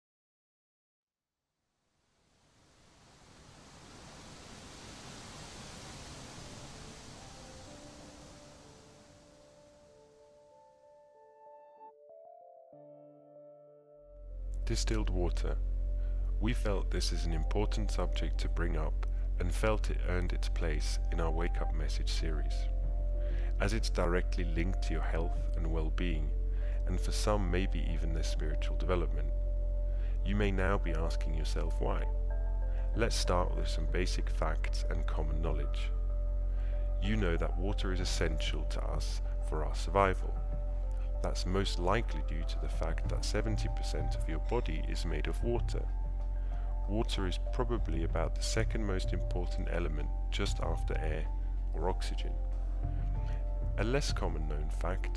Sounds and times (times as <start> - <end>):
Silence: 1.8 - 10.6.